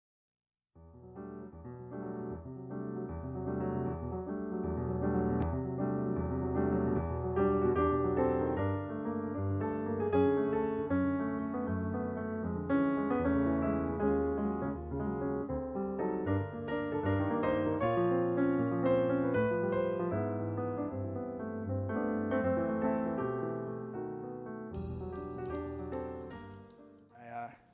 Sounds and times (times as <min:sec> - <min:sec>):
Piano: 0:00.8 - 0:27.7.